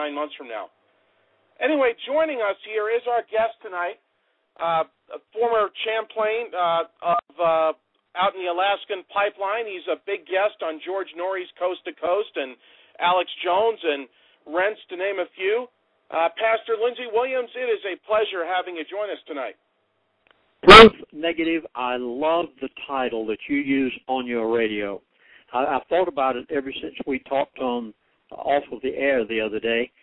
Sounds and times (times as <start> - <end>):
Speech: 0.0 - 0.7, 1.6 - 4.0, 4.6 - 19.6, 20.6 - 30.0.